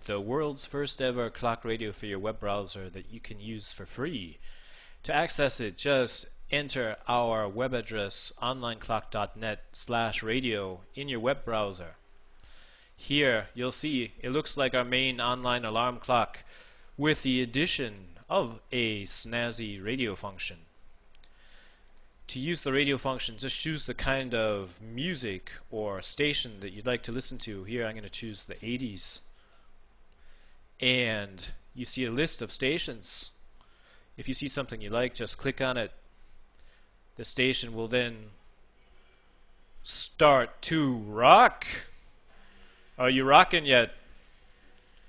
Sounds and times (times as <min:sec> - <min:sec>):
Speech: 0:00.0 - 0:04.4, 0:05.0 - 0:12.0, 0:13.0 - 0:20.7, 0:22.3 - 0:29.3, 0:30.8 - 0:33.4, 0:34.2 - 0:36.0, 0:37.2 - 0:38.4, 0:39.8 - 0:42.0, 0:43.0 - 0:44.0.